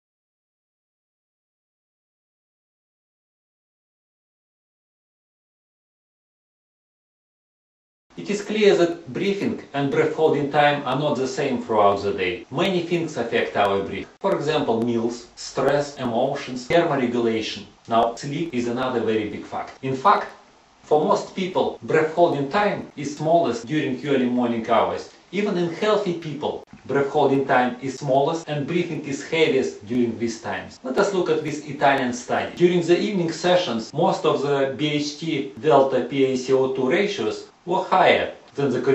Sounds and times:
Speech: 8.2s - 38.9s.

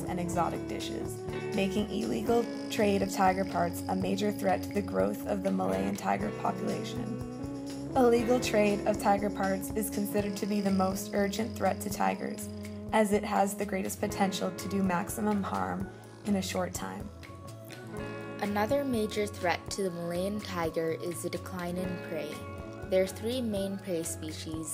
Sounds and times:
Speech: 0.0s - 7.1s, 8.0s - 17.1s, 18.4s - 24.7s
Music: 0.0s - 24.7s.

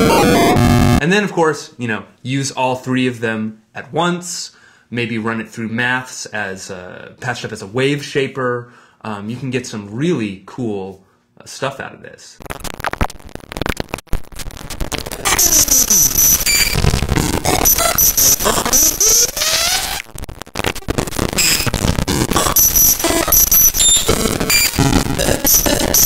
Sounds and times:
Noise: 0.0s - 5.1s, 11.4s - 26.0s
Speech: 1.0s - 12.4s.

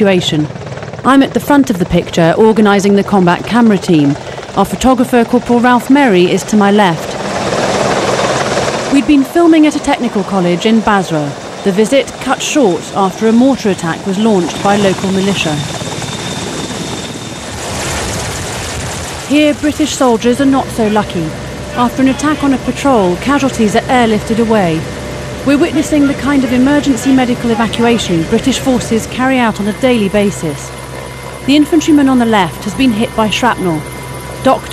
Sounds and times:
Speech: 0.0s - 0.5s, 1.1s - 7.2s, 9.0s - 15.7s, 19.3s - 24.8s, 25.5s - 30.7s, 31.5s - 33.8s, 34.5s - 34.7s.

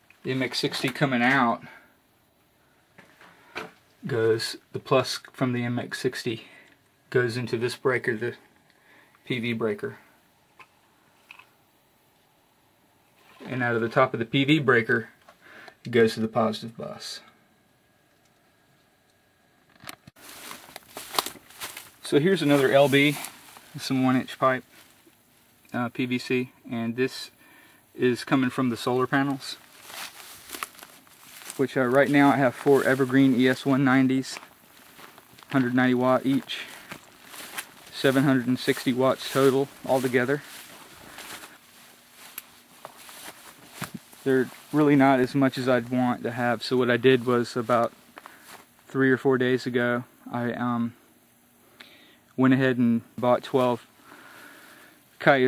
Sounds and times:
Speech: 0.2s - 1.8s, 4.0s - 8.4s, 9.2s - 10.1s, 13.4s - 15.2s, 15.9s - 17.4s, 22.0s - 24.7s, 25.7s - 27.4s, 28.0s - 29.6s, 31.5s - 34.4s, 35.5s - 36.8s, 37.9s - 40.6s, 44.2s - 47.9s, 48.9s - 51.0s, 52.4s - 53.9s, 55.2s - 55.4s
Rustling leaves: 20.2s - 25.6s, 28.2s - 48.8s.

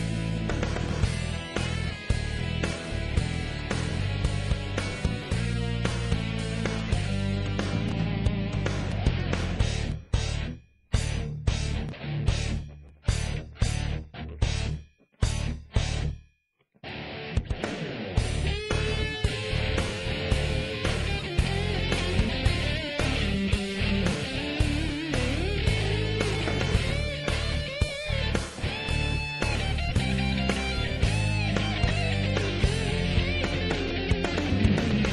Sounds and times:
Music: 0.0s - 35.1s.

